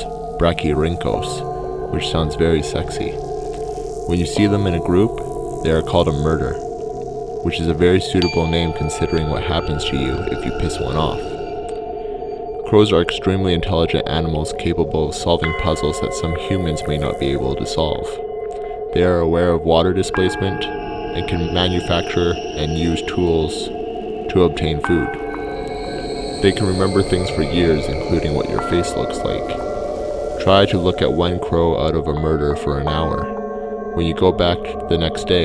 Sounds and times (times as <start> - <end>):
Speech: 0.0 - 3.2, 4.1 - 6.6, 7.5 - 11.4, 12.7 - 18.2, 18.9 - 23.7, 24.3 - 25.2, 26.4 - 29.6, 30.4 - 33.4, 34.0 - 35.4
Music: 0.0 - 35.4.